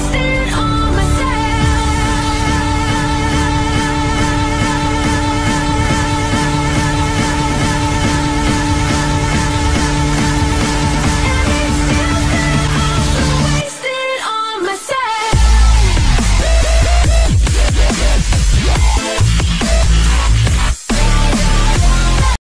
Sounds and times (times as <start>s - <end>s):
Dubstep: 0.0s - 22.4s.